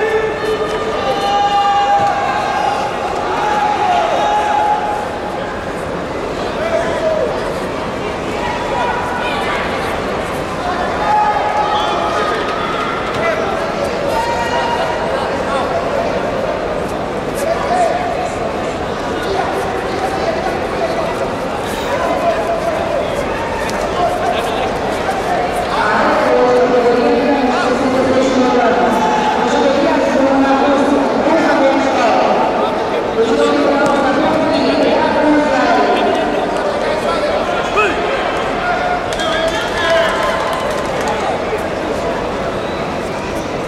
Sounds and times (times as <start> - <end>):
Speech: 5.5 - 42.6.